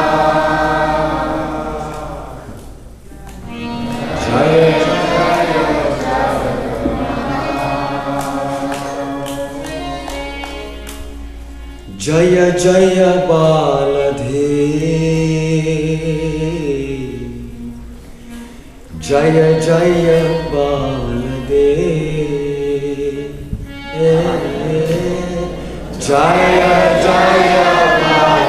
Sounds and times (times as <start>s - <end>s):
Choir: 0.0s - 2.8s, 3.4s - 10.5s, 18.9s - 28.4s
Male singing: 4.1s - 6.5s, 11.9s - 17.7s, 19.0s - 28.4s.